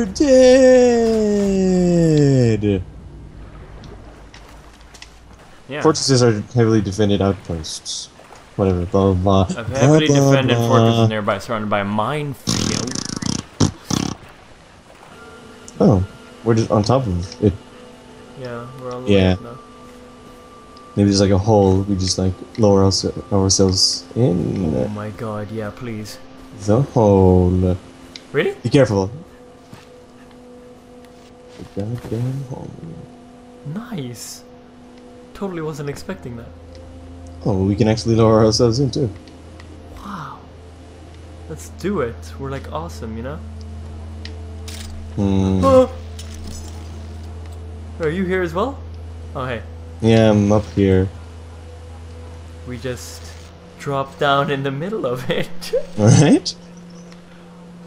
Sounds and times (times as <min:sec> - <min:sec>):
Speech: 0:00.0 - 0:02.8, 0:05.7 - 0:13.0, 0:21.0 - 0:27.8, 0:35.4 - 0:36.5, 0:37.4 - 0:39.2, 0:45.2 - 0:46.0, 0:48.0 - 0:48.8, 0:49.4 - 0:51.2, 0:52.7 - 0:56.6
Outside, rural or natural: 0:00.0 - 0:57.8.